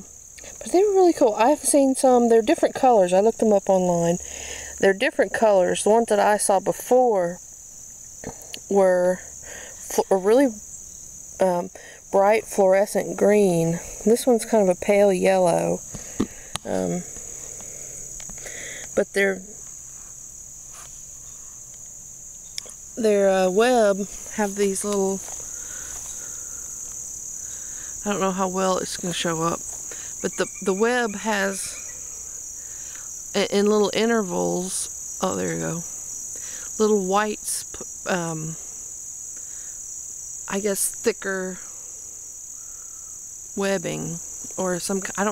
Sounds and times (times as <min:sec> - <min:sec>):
Speech: 0:00.0 - 0:04.2, 0:04.8 - 0:07.4, 0:08.6 - 0:09.2, 0:09.8 - 0:10.6, 0:11.4 - 0:15.8, 0:16.7 - 0:17.1, 0:23.0 - 0:25.2, 0:28.0 - 0:29.6, 0:30.2 - 0:31.8, 0:33.4 - 0:35.9, 0:36.8 - 0:38.6, 0:40.5 - 0:41.6, 0:43.6 - 0:45.3
Insect: 0:00.0 - 0:45.3.